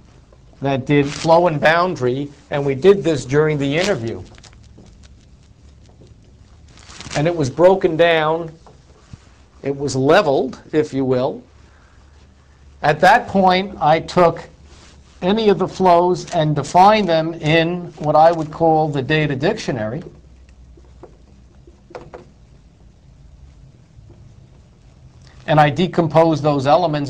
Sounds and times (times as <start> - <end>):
Speech: 0.6 - 4.3, 7.2 - 8.6, 9.6 - 11.5, 12.8 - 14.6, 15.2 - 20.2, 25.5 - 27.1.